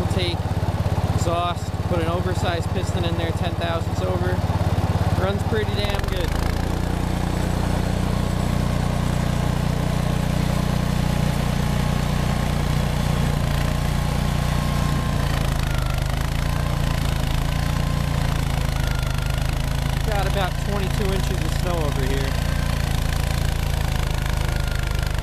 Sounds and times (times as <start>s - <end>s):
Speech: 0.0s - 0.4s, 1.1s - 4.4s, 5.2s - 6.4s, 20.0s - 22.4s
Lawn mower: 0.0s - 25.2s.